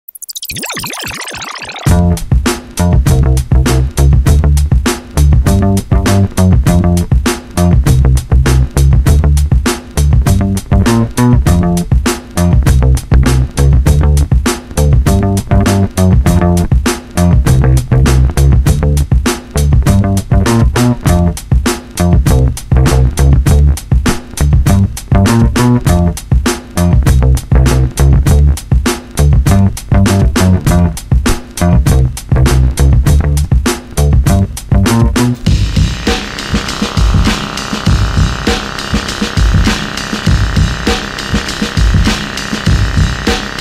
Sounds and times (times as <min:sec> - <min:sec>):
Music: 0:00.8 - 0:43.6.